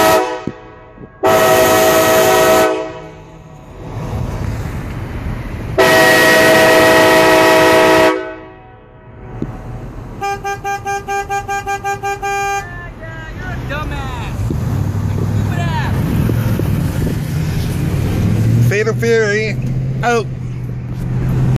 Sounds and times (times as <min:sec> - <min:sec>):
Vehicle: 0:00.0 - 0:21.5
Speech: 0:12.6 - 0:14.4, 0:15.5 - 0:16.0, 0:18.7 - 0:20.3.